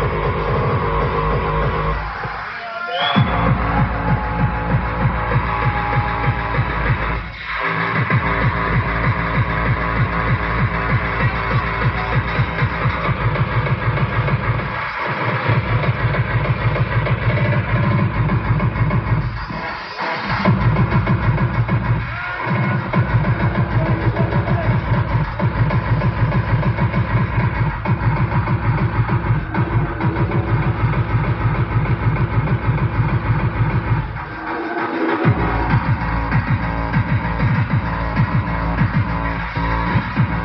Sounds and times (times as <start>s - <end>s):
Music: 0.0s - 40.4s.